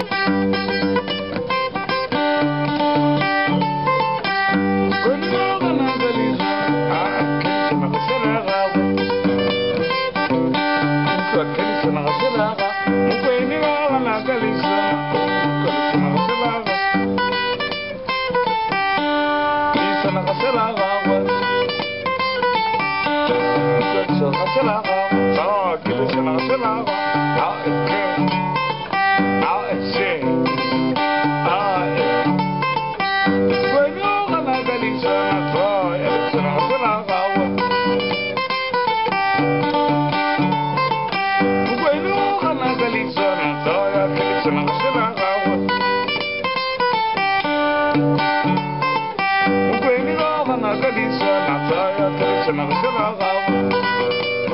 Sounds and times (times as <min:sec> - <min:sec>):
Strum: 0:00.0 - 0:54.5.